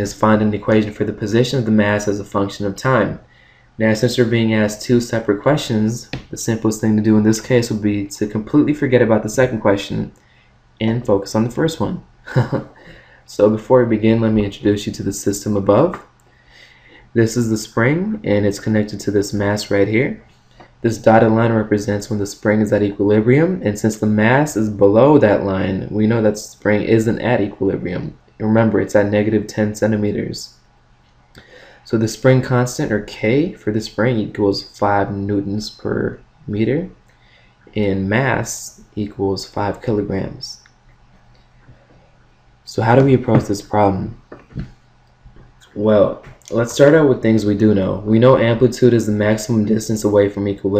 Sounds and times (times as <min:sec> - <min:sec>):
Speech: 0:00.0 - 0:10.2, 0:10.8 - 0:12.7, 0:13.3 - 0:16.1, 0:17.1 - 0:30.6, 0:31.8 - 0:37.0, 0:37.7 - 0:40.7, 0:42.7 - 0:44.7, 0:45.6 - 0:50.7.